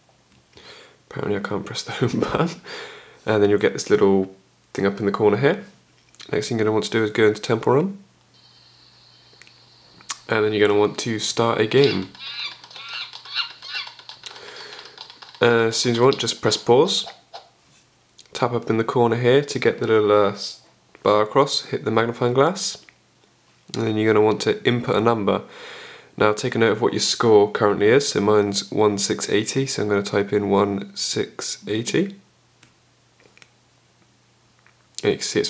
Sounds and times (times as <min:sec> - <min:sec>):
Speech: 0:01.1 - 0:02.6, 0:03.2 - 0:08.1, 0:10.2 - 0:12.2, 0:15.4 - 0:17.1, 0:18.2 - 0:22.9, 0:23.7 - 0:25.5, 0:26.2 - 0:32.2, 0:35.0 - 0:35.5.